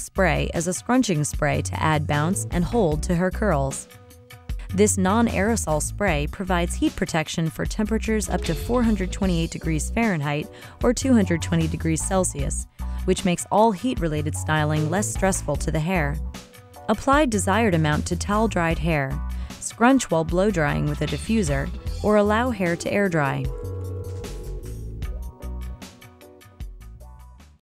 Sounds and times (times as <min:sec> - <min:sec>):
Speech: 0:00.0 - 0:03.9, 0:04.7 - 0:16.2, 0:16.9 - 0:23.5
Music: 0:00.0 - 0:27.6.